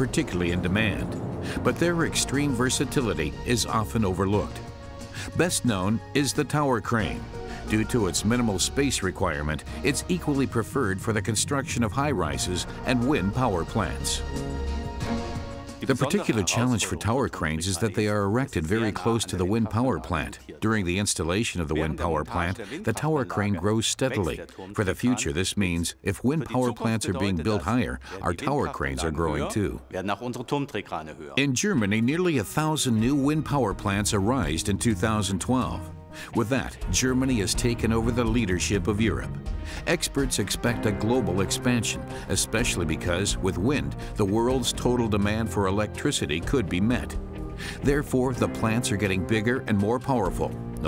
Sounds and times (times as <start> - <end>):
Speech: 0.0 - 4.6, 5.2 - 14.2, 15.8 - 47.2, 47.8 - 50.8
Music: 0.0 - 50.8.